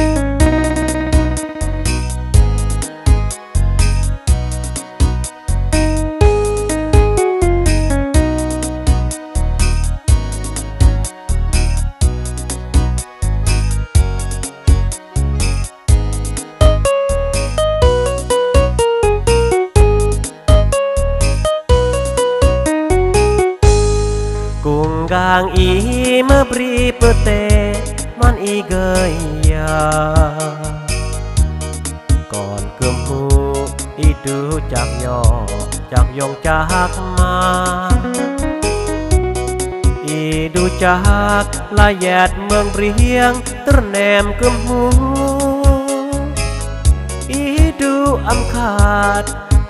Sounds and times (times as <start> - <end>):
Music: 0.0 - 49.7.